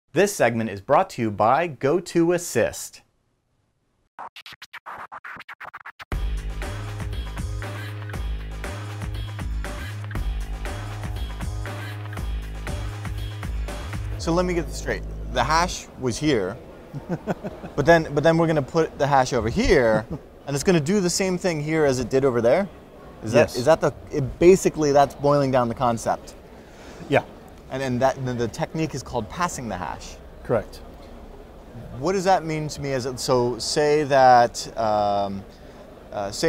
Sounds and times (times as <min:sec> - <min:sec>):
Speech: 0:00.1 - 0:03.0, 0:14.2 - 0:16.6, 0:17.8 - 0:26.3, 0:27.1 - 0:30.8, 0:31.8 - 0:35.4, 0:36.1 - 0:36.4
Music: 0:06.1 - 0:16.4.